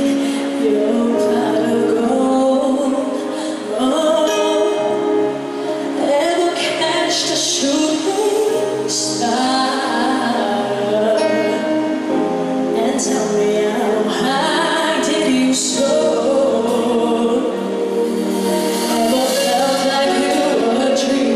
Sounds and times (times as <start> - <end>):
Music: 0.0 - 21.3.